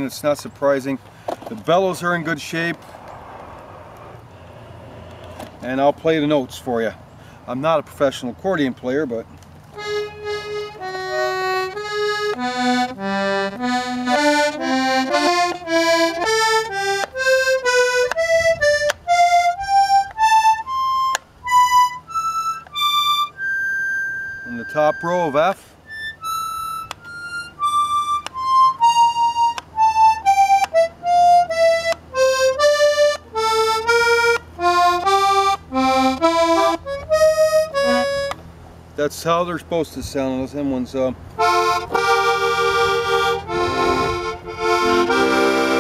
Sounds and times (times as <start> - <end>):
Speech: 0.0 - 2.8, 5.6 - 9.3, 24.5 - 25.6, 39.0 - 41.2
Music: 9.8 - 25.3, 25.9 - 38.4, 41.4 - 45.8.